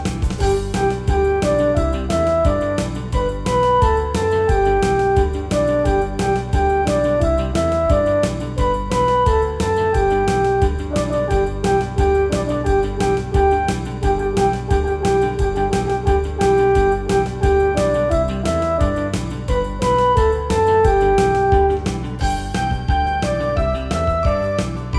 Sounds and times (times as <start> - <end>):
Background music: 0.0 - 24.9.